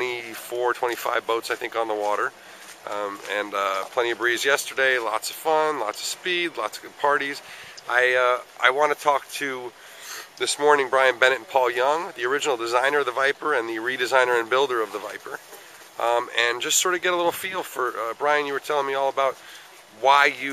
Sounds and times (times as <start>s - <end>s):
Speech: 0.0s - 15.4s, 16.0s - 19.4s, 20.0s - 20.5s.